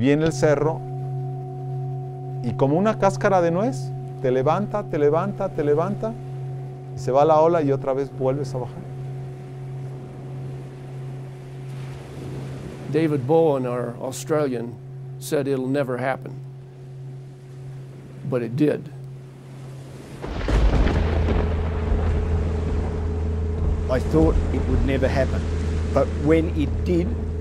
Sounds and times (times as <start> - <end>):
Speech: 0.0 - 0.8, 2.4 - 6.2, 7.0 - 8.8, 12.9 - 16.4, 18.3 - 19.0, 23.9 - 25.4, 26.0 - 27.2
Outside, rural or natural: 0.0 - 27.4.